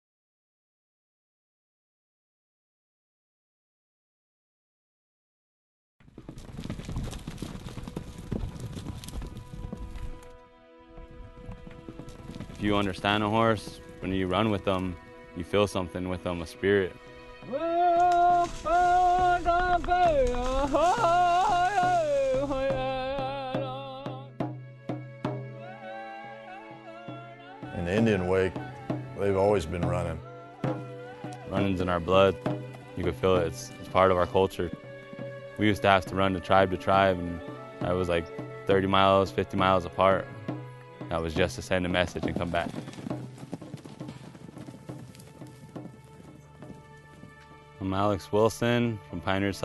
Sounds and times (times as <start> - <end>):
Music: 6.6 - 49.6
Speech: 12.6 - 17.0, 27.8 - 28.6, 29.2 - 30.2, 31.5 - 32.4, 33.0 - 34.7, 35.6 - 40.4, 41.1 - 42.7, 47.8 - 49.6.